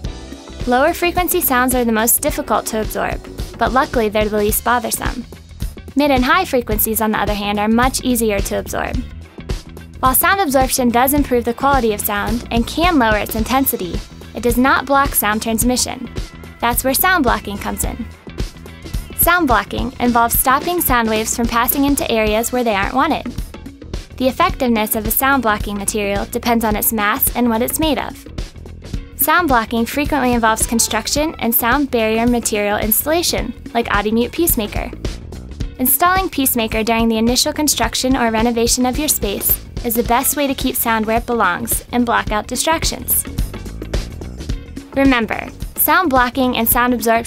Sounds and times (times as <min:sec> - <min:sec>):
Music: 0:00.0 - 0:47.2
Speech: 0:00.7 - 0:05.2, 0:06.0 - 0:09.0, 0:10.0 - 0:18.1, 0:19.2 - 0:23.3, 0:24.2 - 0:28.2, 0:29.2 - 0:34.9, 0:35.8 - 0:43.3, 0:45.0 - 0:47.2.